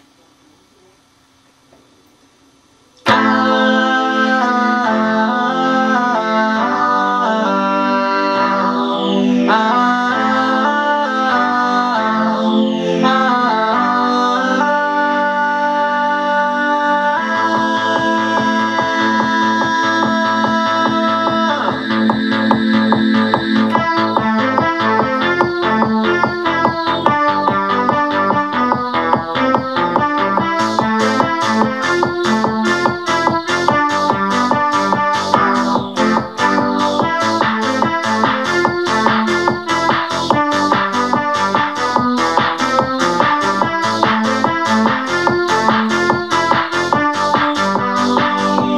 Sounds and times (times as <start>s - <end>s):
Music: 3.0s - 48.7s.